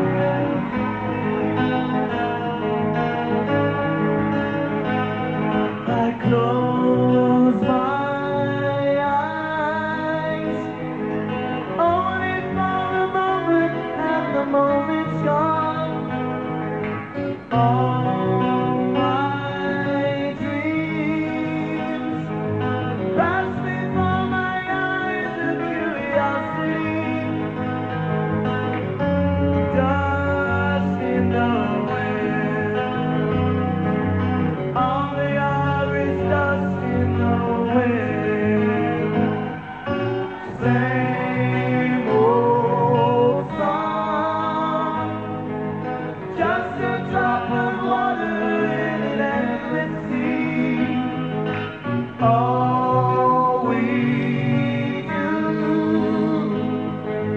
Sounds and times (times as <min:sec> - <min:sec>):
Music: 0:00.0 - 0:57.3.